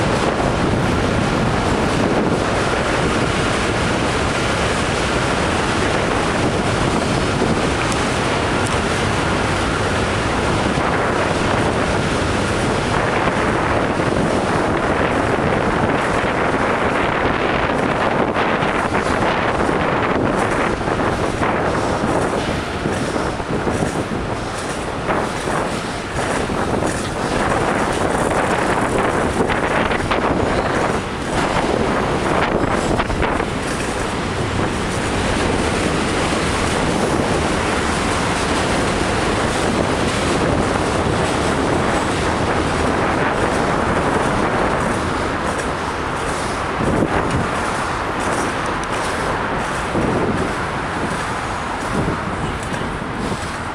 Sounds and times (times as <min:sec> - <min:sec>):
Bicycle: 0:00.0 - 0:53.7.